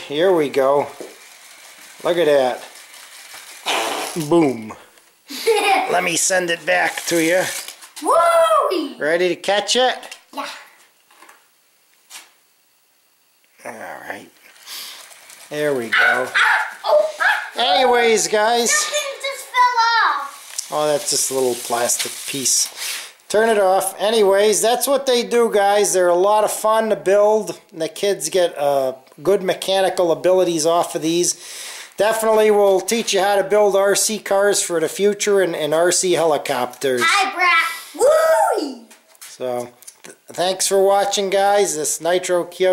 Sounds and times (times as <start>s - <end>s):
Inside, small room: 0.0s - 42.7s.